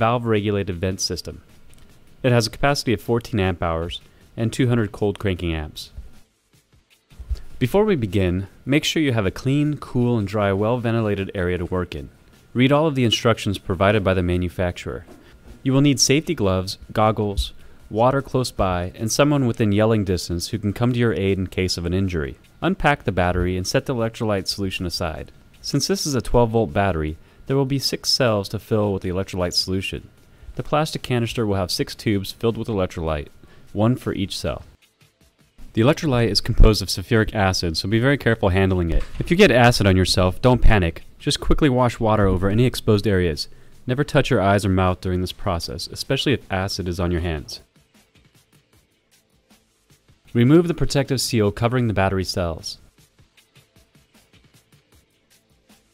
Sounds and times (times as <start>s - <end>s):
Speech: 0.0s - 1.4s, 2.2s - 6.0s, 7.6s - 34.8s, 35.7s - 47.6s, 50.3s - 52.9s
Music: 0.0s - 55.9s.